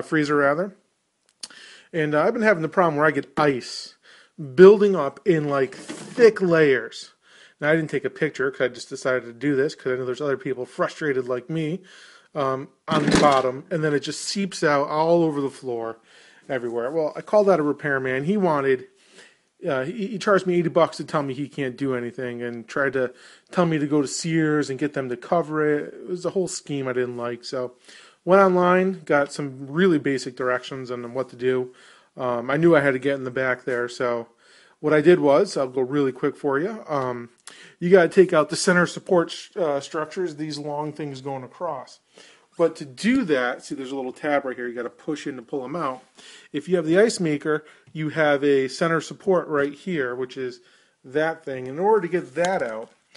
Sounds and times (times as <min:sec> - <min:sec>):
Speech: 0:00.0 - 0:00.8, 0:01.4 - 0:19.0, 0:19.6 - 0:53.1.